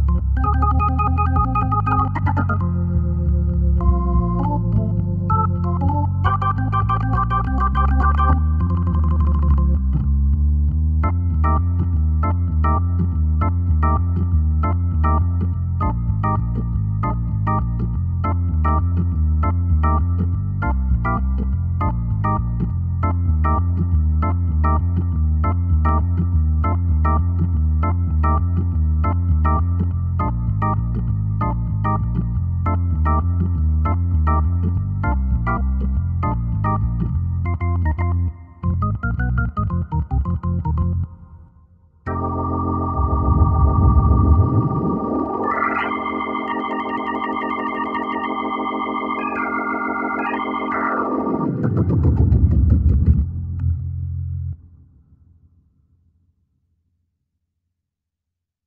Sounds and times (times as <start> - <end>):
Electric piano: 0.0 - 41.5, 42.1 - 54.6.